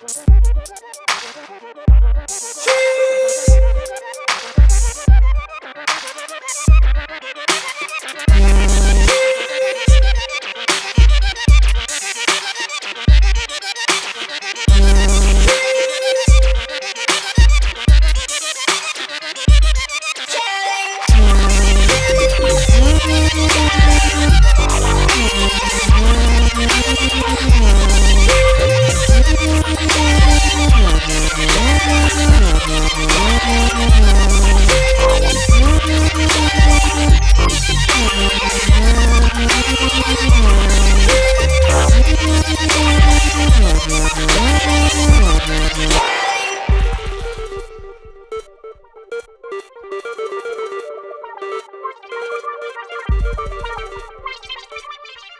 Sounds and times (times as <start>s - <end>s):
Music: 0.0s - 55.3s.